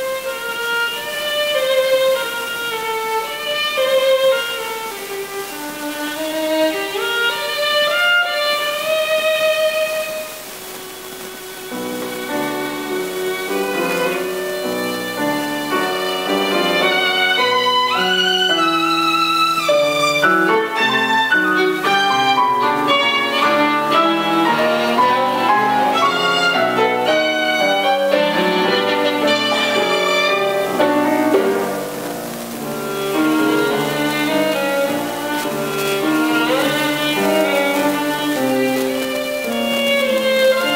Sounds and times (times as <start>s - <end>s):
Violin, fiddle: 0.0s - 40.7s.